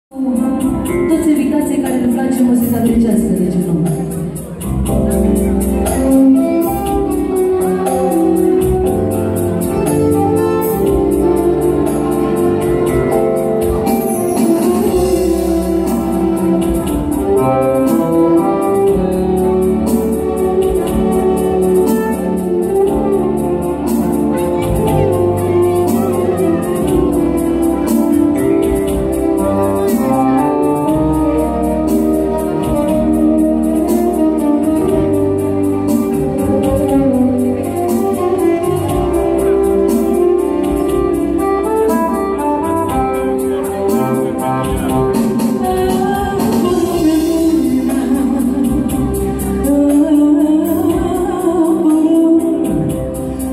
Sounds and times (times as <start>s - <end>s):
Music: 0.1s - 53.5s.